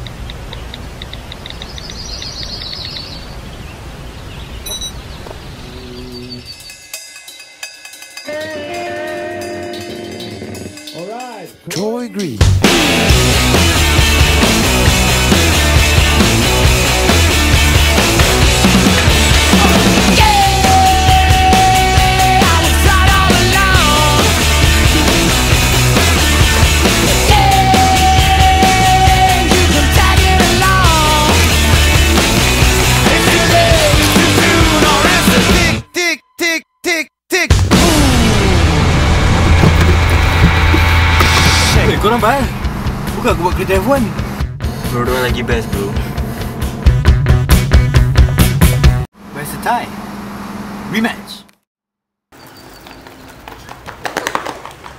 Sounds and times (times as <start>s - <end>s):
Music: 6.6s - 35.9s, 37.5s - 49.1s.